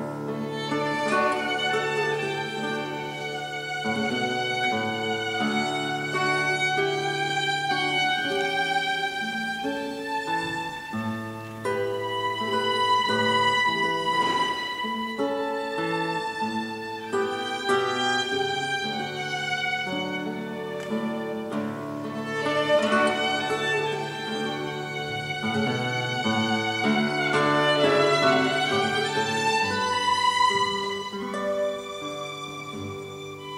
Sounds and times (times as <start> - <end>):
Guitar: 0.0 - 33.5
Violin, fiddle: 0.0 - 33.5.